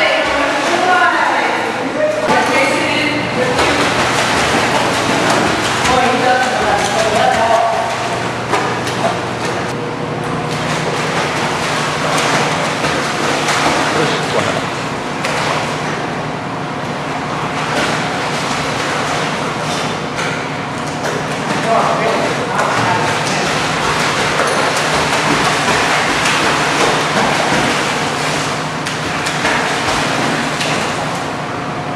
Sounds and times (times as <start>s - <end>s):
Speech: 0.0s - 3.8s, 5.9s - 7.9s, 13.9s - 14.7s, 21.6s - 23.6s.